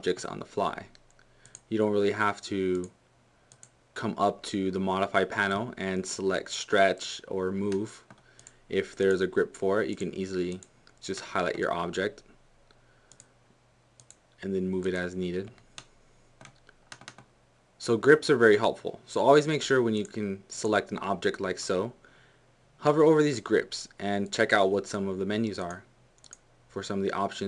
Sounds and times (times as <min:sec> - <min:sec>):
Speech: 0:00.0 - 0:01.0, 0:01.7 - 0:03.0, 0:04.0 - 0:08.1, 0:08.7 - 0:12.3, 0:14.4 - 0:15.6, 0:17.8 - 0:22.0, 0:22.8 - 0:25.9, 0:26.7 - 0:27.4
Computer keyboard: 0:15.8 - 0:17.3.